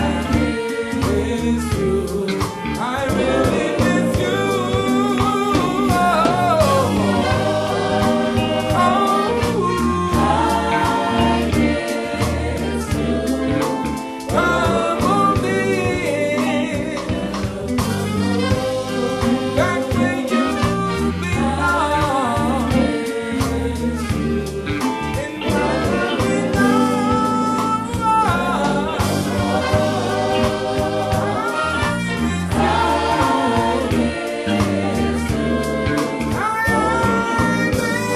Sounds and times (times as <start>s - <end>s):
Musical instrument: 0.0s - 38.1s
Singing: 0.0s - 38.1s.